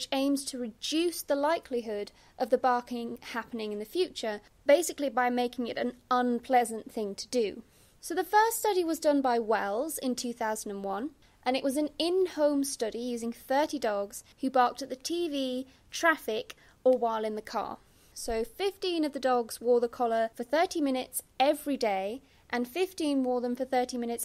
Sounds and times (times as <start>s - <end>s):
Speech: 0.0s - 24.2s.